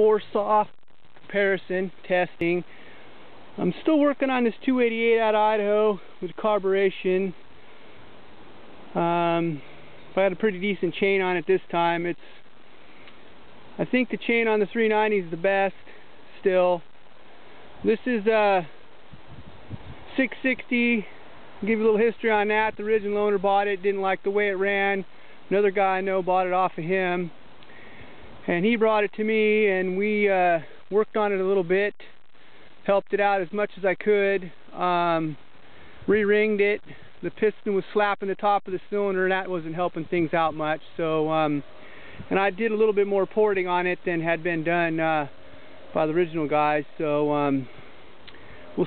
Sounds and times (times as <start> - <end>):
Speech: 0.0 - 2.7, 3.6 - 7.4, 8.9 - 9.6, 10.2 - 12.2, 13.8 - 16.9, 17.8 - 18.8, 20.1 - 27.4, 28.4 - 32.1, 32.8 - 35.4, 36.1 - 41.7, 42.3 - 45.3, 45.9 - 47.7.